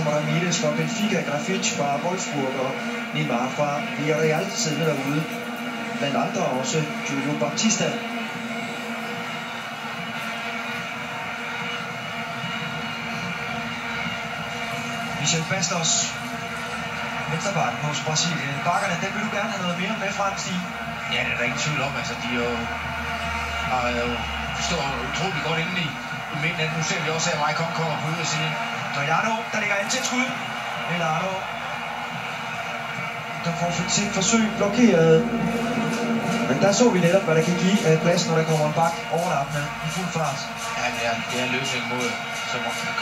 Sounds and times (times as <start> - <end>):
Speech: 0.0 - 5.4, 6.0 - 8.0, 15.2 - 16.2, 17.3 - 22.7, 23.7 - 31.4, 33.4 - 35.4, 36.4 - 43.0.